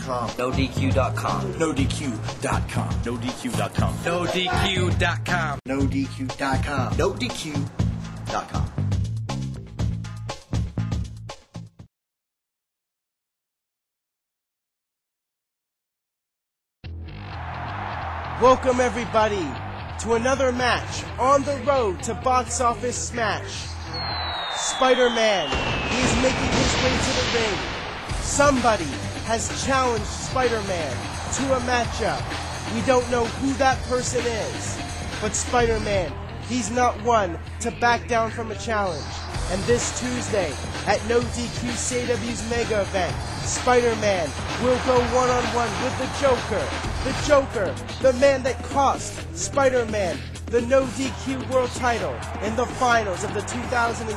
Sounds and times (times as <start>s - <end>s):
Speech: 0.0s - 7.7s, 8.3s - 8.8s, 18.4s - 23.8s, 24.7s - 27.6s, 28.2s - 54.1s
Music: 0.0s - 11.9s, 16.8s - 54.1s.